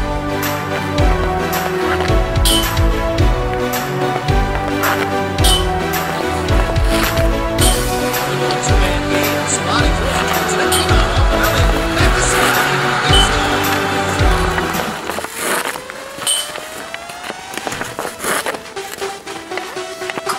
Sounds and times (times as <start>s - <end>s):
Music: 0.0s - 20.3s.